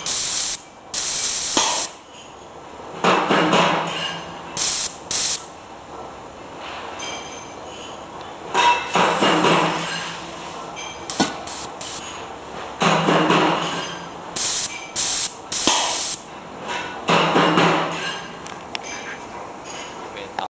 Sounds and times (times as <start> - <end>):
Spray: 0.0 - 2.0, 4.6 - 5.5, 11.1 - 12.0, 14.4 - 16.2
Speech: 20.1 - 20.5.